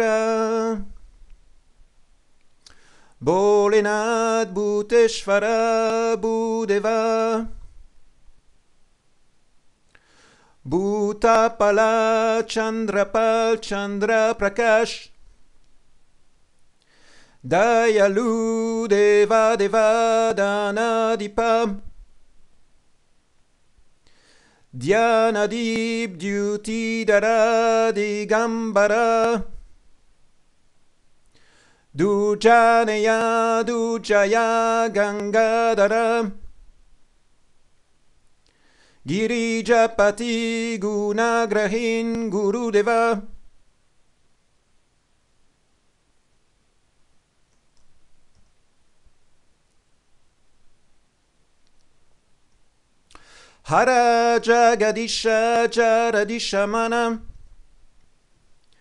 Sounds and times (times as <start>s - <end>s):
Mantra: 0.0s - 1.0s, 3.2s - 7.7s, 10.6s - 15.2s, 17.4s - 22.0s, 24.7s - 29.6s, 32.0s - 36.5s, 39.0s - 43.4s, 53.6s - 57.4s.